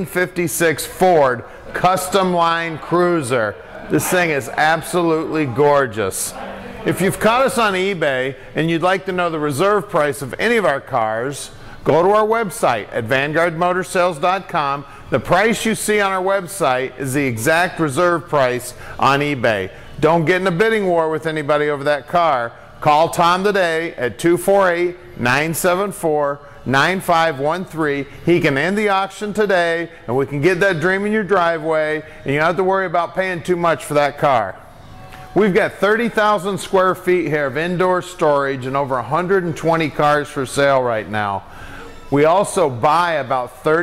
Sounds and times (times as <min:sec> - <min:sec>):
Speech: 0:00.0 - 0:34.6, 0:35.4 - 0:41.4, 0:42.1 - 0:43.8.